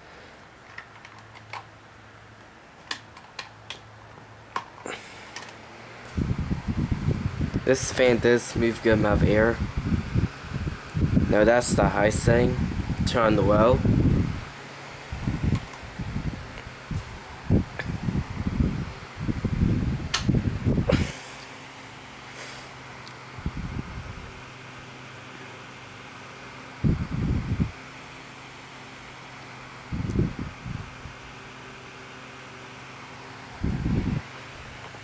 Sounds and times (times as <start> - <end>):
Mechanical fan: 0.0 - 35.0
Speech: 7.6 - 9.6, 11.3 - 13.8.